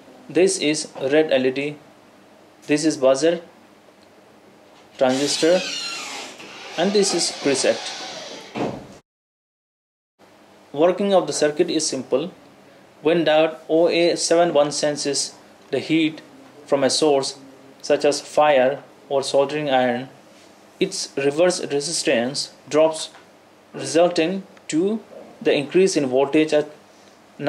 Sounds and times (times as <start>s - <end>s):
Speech: 0.3s - 1.8s, 2.6s - 3.5s, 5.0s - 5.7s, 6.8s - 7.9s, 10.7s - 12.4s, 13.0s - 20.2s, 20.8s - 23.2s, 23.8s - 26.8s.